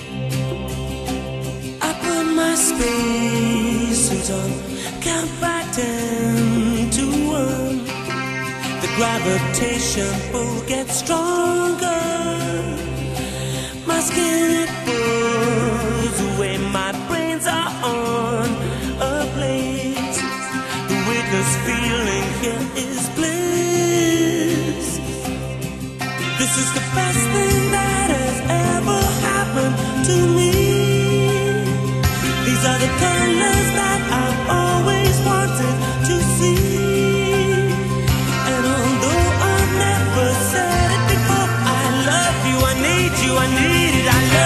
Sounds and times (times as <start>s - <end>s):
Music: 0.0s - 44.4s.